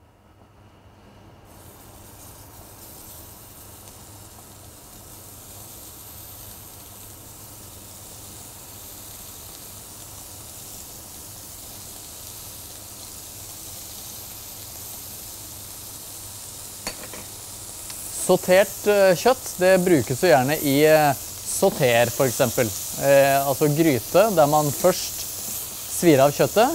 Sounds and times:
Sizzle: 0:01.5 - 0:26.7.

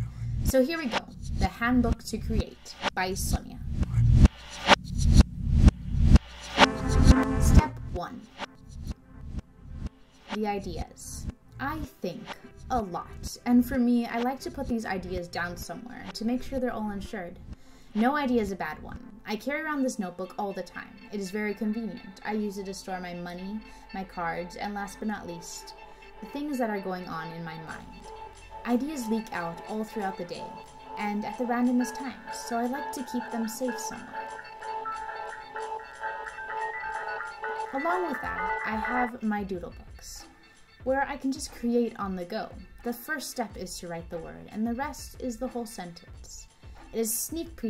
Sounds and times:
Music: 0:00.0 - 0:47.6
Speech: 0:00.5 - 0:03.6, 0:07.4 - 0:08.4, 0:10.3 - 0:17.4, 0:18.0 - 0:28.0, 0:28.6 - 0:34.2, 0:37.8 - 0:47.6.

